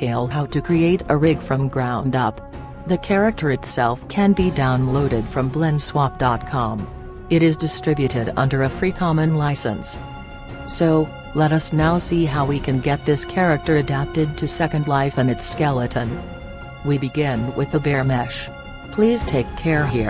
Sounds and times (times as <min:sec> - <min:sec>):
Speech: 0:00.0 - 0:10.0, 0:10.7 - 0:16.2, 0:16.9 - 0:20.0
Music: 0:00.0 - 0:20.0.